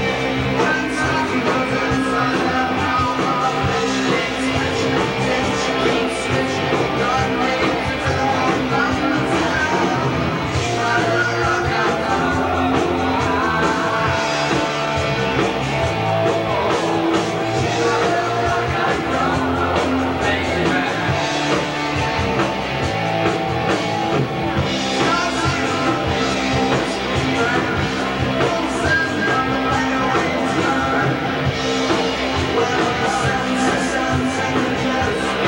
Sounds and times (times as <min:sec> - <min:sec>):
Rock and roll: 0:00.0 - 0:35.4.